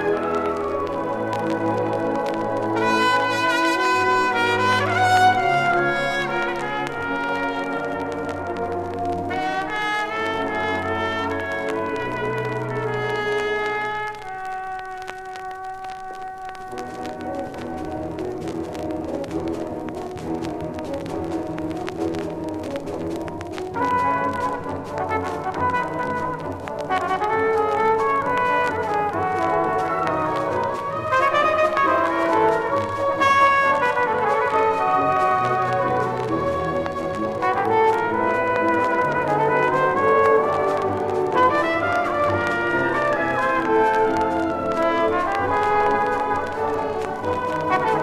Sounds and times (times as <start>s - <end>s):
Trombone: 0.0s - 48.0s
Trumpet: 0.0s - 48.0s.